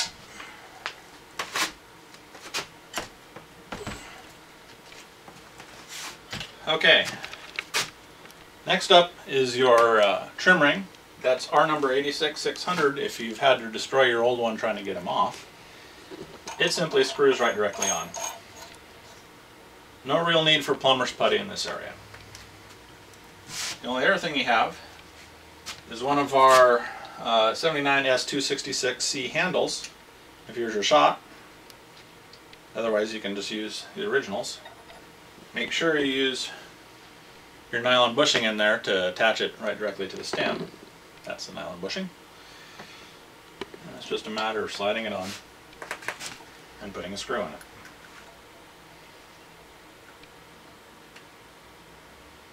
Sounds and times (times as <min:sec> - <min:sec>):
Speech: 0:06.6 - 0:07.2, 0:08.6 - 0:15.4, 0:16.6 - 0:18.2, 0:20.0 - 0:22.0, 0:23.8 - 0:24.9, 0:25.9 - 0:31.2, 0:32.8 - 0:34.6, 0:35.6 - 0:36.7, 0:37.7 - 0:40.7, 0:41.3 - 0:42.2, 0:43.8 - 0:45.4, 0:46.8 - 0:47.6.